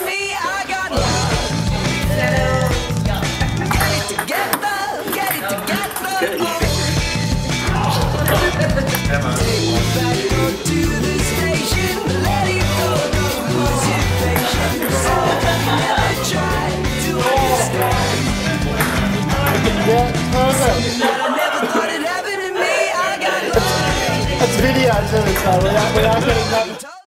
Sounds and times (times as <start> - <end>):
Music: 0.0 - 27.0
Speech: 18.8 - 21.9, 23.5 - 27.0.